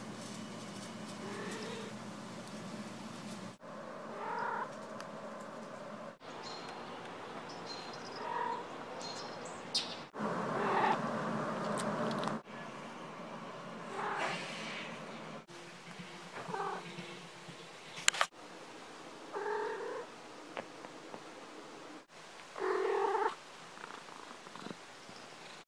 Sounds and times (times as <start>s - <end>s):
Caterwaul: 19.3s - 20.1s, 22.6s - 23.4s.